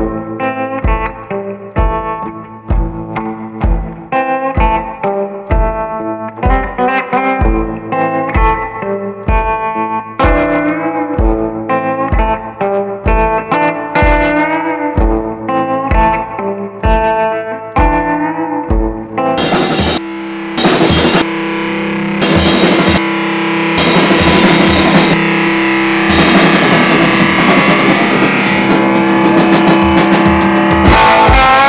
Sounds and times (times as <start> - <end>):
Music: 0.0 - 31.6.